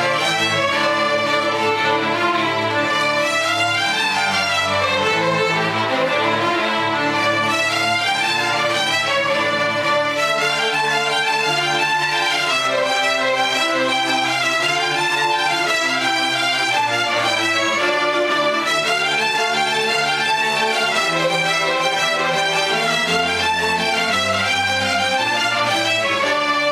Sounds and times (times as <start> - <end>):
Violin, fiddle: 0.0 - 26.7.